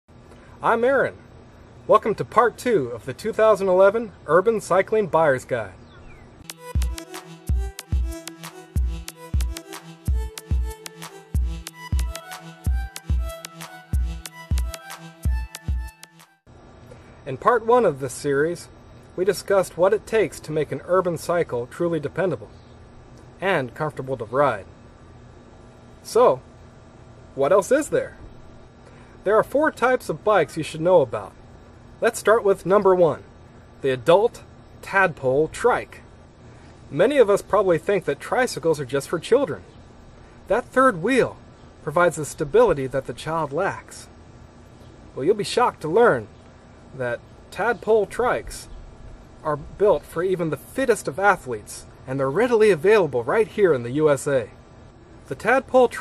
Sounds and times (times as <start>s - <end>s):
Speech: 0.6s - 1.2s, 1.9s - 5.8s, 17.2s - 22.5s, 23.4s - 24.7s, 26.0s - 26.4s, 27.4s - 28.2s, 29.2s - 31.4s, 32.0s - 36.0s, 36.9s - 39.7s, 40.5s - 44.1s, 45.2s - 46.3s, 46.9s - 48.7s, 49.4s - 54.6s, 55.3s - 56.0s
Music: 6.4s - 16.5s.